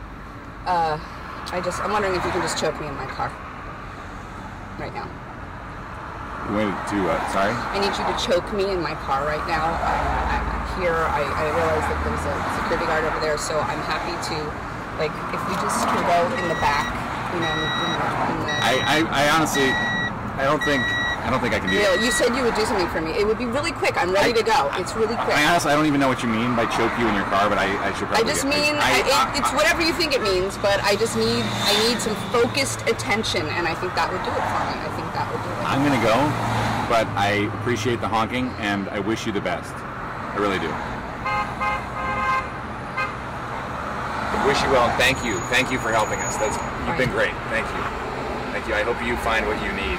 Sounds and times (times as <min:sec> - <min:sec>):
Car: 0:00.0 - 0:49.9
Outside, urban or manmade: 0:00.0 - 0:49.9
Speech: 0:20.4 - 0:31.1, 0:44.4 - 0:47.8.